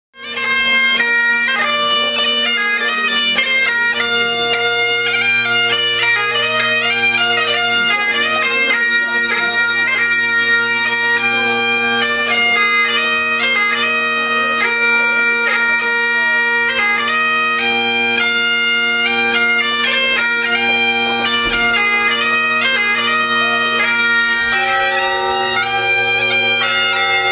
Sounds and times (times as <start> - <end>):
Bagpipes: 0.2 - 27.3.